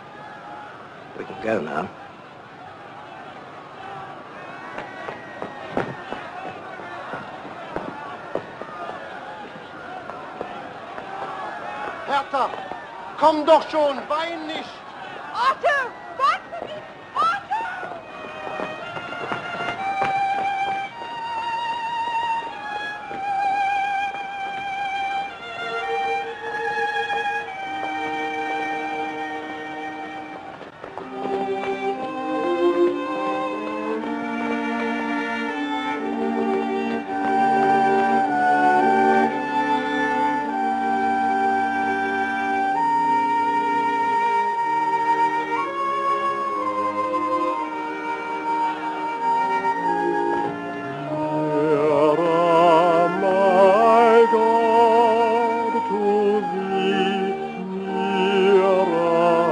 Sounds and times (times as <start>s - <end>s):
Violin, fiddle: 17.2s - 59.5s.